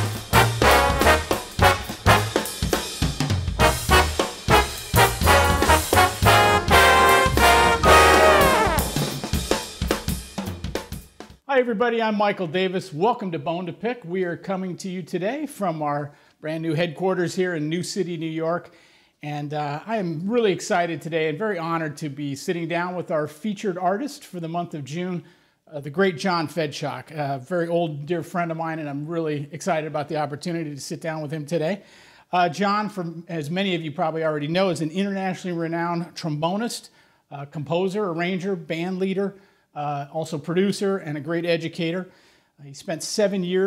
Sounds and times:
Trombone: 0:00.0 - 0:02.7, 0:03.6 - 0:09.2.

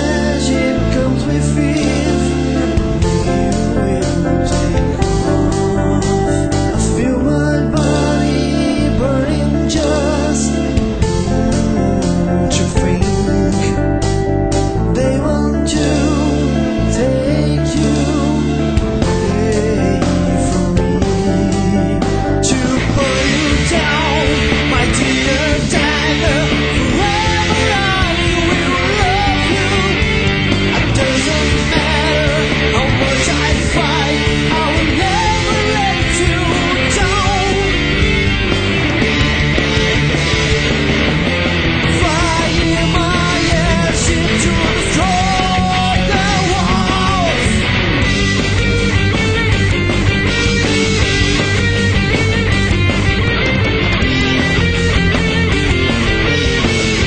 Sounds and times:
Music: 0:00.0 - 0:57.0.

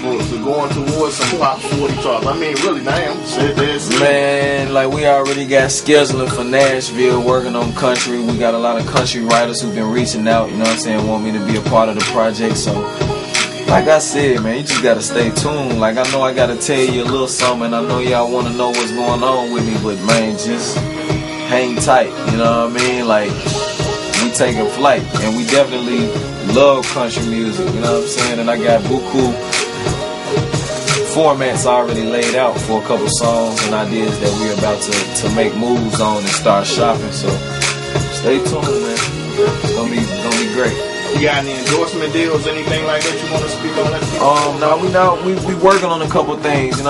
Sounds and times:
Speech: 0:00.0 - 0:12.8, 0:13.7 - 0:20.8, 0:21.5 - 0:23.4, 0:24.2 - 0:29.4, 0:30.9 - 0:37.4, 0:38.1 - 0:46.9
Rapping: 0:00.0 - 0:20.9, 0:21.5 - 0:23.6, 0:24.2 - 0:29.6, 0:30.9 - 0:46.9
Music: 0:00.0 - 0:46.9.

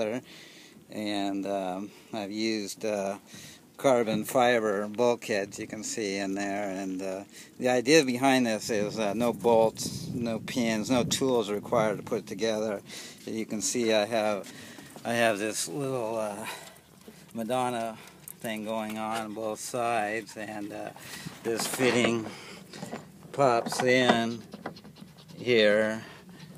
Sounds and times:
Speech: 0:00.0 - 0:00.2, 0:00.9 - 0:03.2, 0:03.8 - 0:16.7, 0:17.4 - 0:22.3, 0:23.4 - 0:24.4, 0:25.4 - 0:26.1.

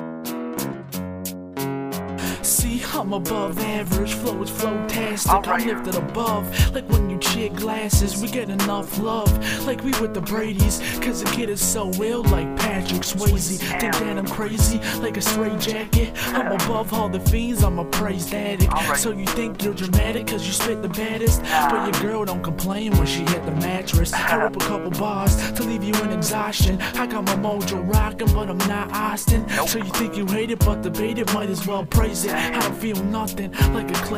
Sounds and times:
Guitar: 0:00.0 - 0:34.1.

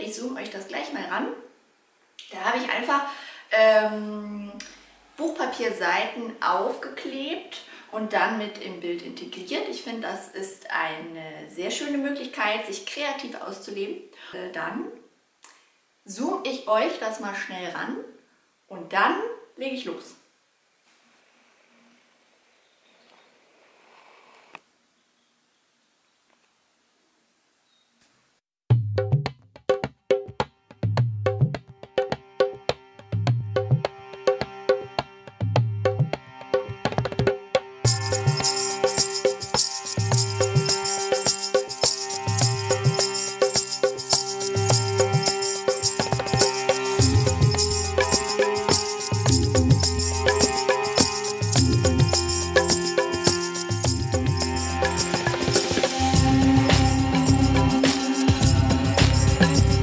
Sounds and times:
Speech: 0:00.0 - 0:01.5, 0:02.2 - 0:15.1, 0:16.1 - 0:20.3.

